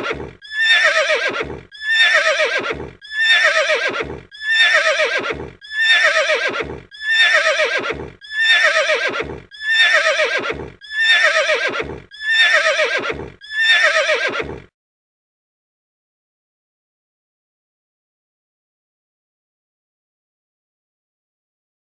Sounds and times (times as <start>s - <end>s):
Neigh, whinny: 0.0s - 14.7s.